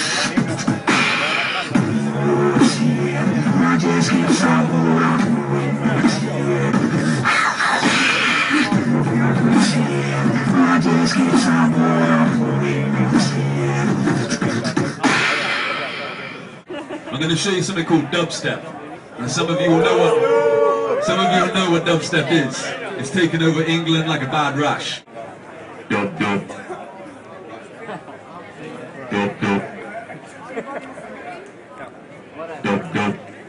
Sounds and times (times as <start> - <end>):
Speech: 0.0 - 7.1, 7.9 - 16.5, 17.1 - 20.4, 21.0 - 33.4.